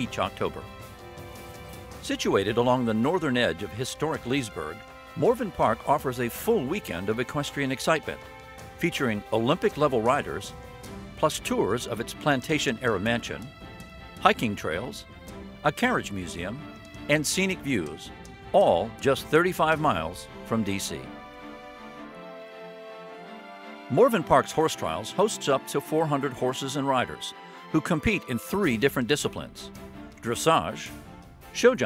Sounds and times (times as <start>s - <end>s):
Speech: 0.0s - 0.7s, 2.0s - 8.2s, 8.8s - 10.5s, 11.2s - 13.5s, 14.2s - 15.0s, 15.6s - 21.2s, 23.9s - 31.0s, 31.6s - 31.8s
Music: 0.0s - 31.8s.